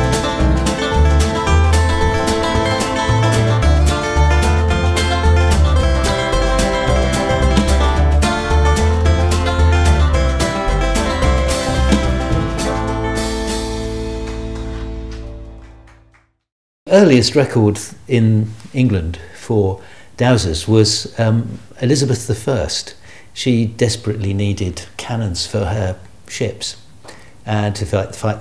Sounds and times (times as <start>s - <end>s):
Music: 0.0s - 16.5s
Speech: 16.9s - 28.4s.